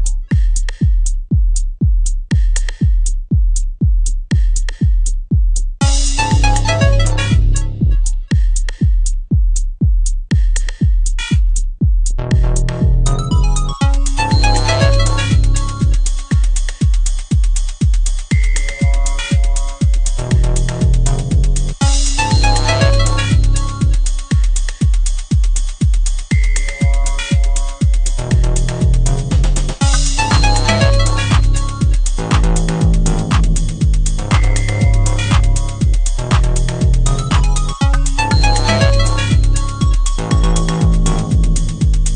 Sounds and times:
Music: 0.0 - 42.1.

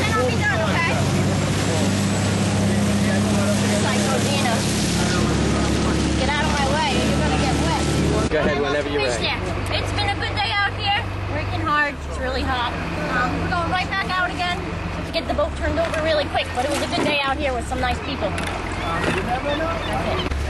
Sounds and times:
Boat, Water vehicle: 0.0 - 20.4.

